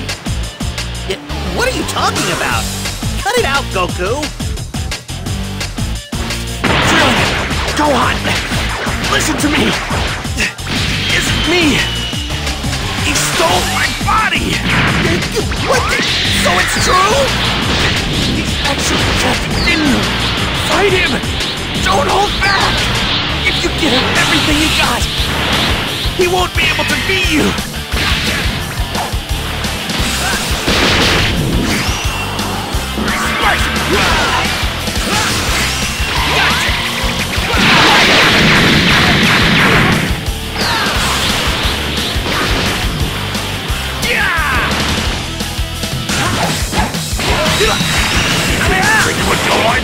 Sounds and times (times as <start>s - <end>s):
Music: 0.0s - 49.8s
Speech: 1.1s - 2.6s, 3.2s - 4.3s, 11.1s - 11.8s, 13.1s - 17.3s, 18.6s - 21.2s, 21.8s - 22.8s, 23.4s - 25.1s, 26.2s - 27.6s, 48.6s - 49.8s.